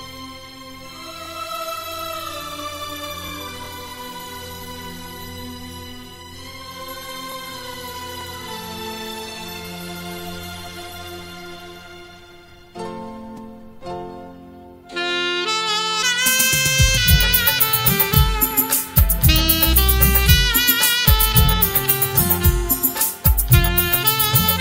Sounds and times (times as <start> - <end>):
Wind instrument, woodwind instrument: 14.9 - 24.6.